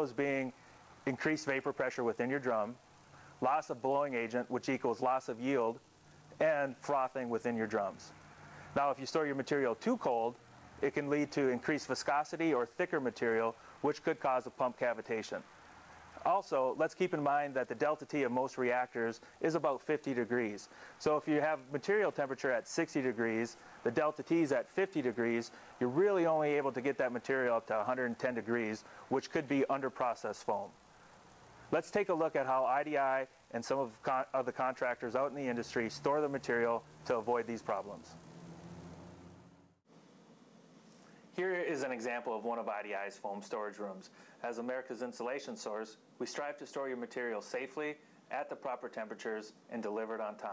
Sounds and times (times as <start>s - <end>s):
Speech: 0.0s - 2.8s, 3.4s - 5.8s, 6.4s - 8.1s, 8.8s - 15.5s, 16.2s - 30.7s, 31.7s - 38.2s, 41.4s - 50.5s.